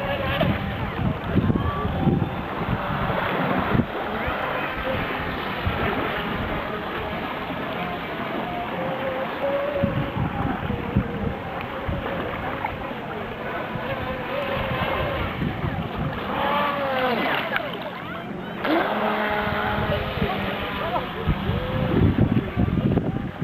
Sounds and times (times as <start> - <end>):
Speech: 10.4 - 23.4.